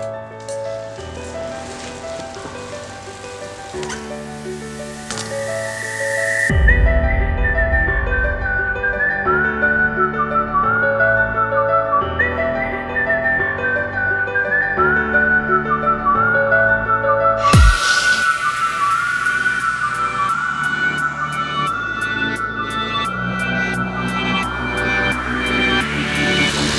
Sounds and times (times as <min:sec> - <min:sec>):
Tender music: 0:00.0 - 0:26.7.